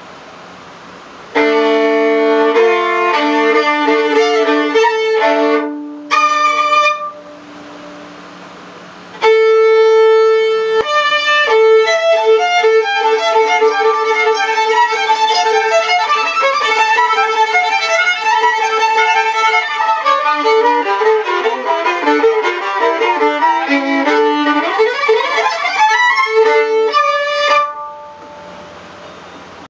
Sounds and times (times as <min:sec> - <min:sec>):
Violin, fiddle: 0:01.4 - 0:07.4, 0:09.2 - 0:28.2.